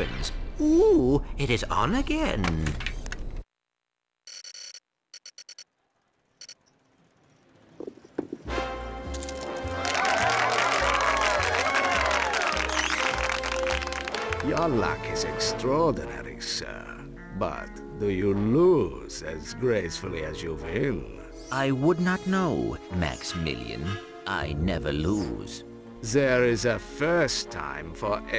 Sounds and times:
Speech: 0.0 - 2.8, 14.5 - 28.3
Music: 8.4 - 28.3.

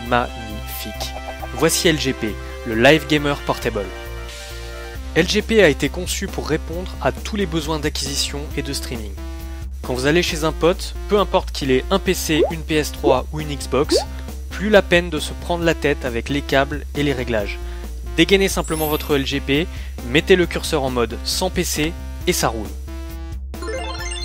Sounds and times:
Speech: 0.0 - 4.0, 5.2 - 9.2, 9.8 - 17.6, 18.2 - 22.8
Music: 0.0 - 24.2.

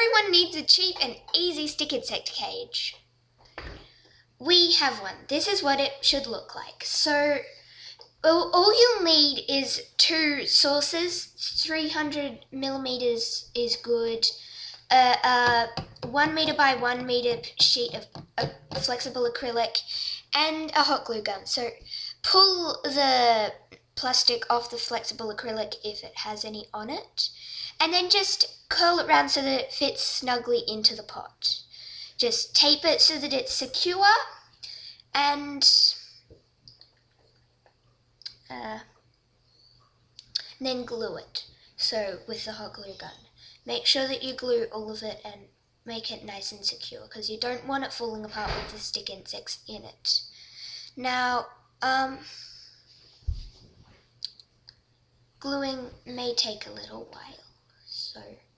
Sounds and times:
Speech: 0.0 - 3.0, 4.4 - 36.2, 38.3 - 38.9, 40.2 - 52.6, 55.4 - 58.5.

